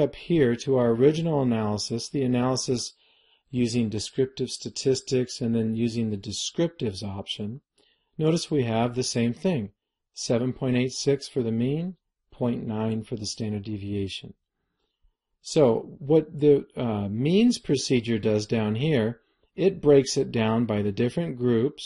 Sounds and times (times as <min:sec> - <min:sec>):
Narration, monologue: 0:00.0 - 0:21.8.